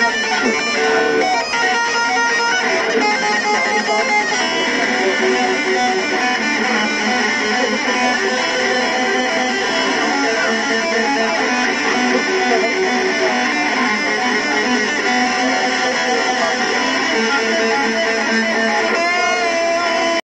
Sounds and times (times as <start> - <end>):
Bass guitar: 0.0 - 20.2.